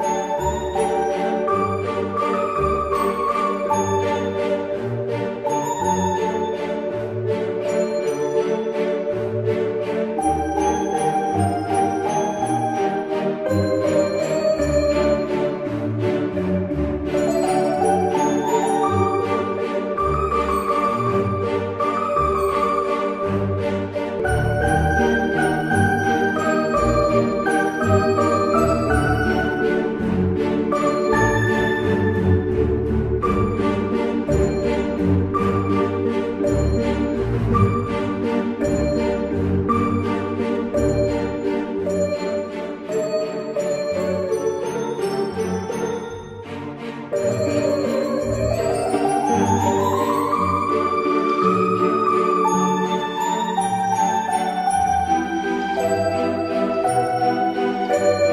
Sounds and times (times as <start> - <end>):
New-age music: 0.0 - 58.3.